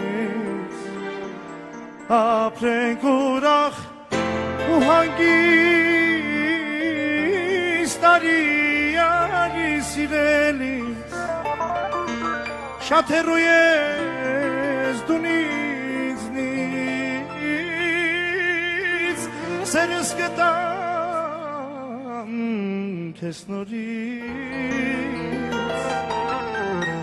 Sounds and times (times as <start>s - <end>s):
Tender music: 0.0s - 27.0s.